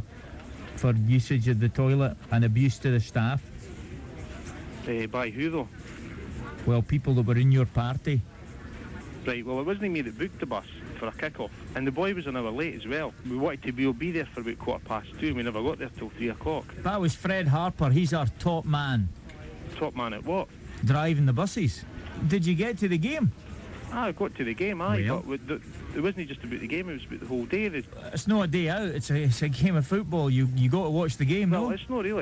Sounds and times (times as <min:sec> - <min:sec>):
Music: 0:00.0 - 0:32.2
Speech: 0:00.0 - 0:32.2.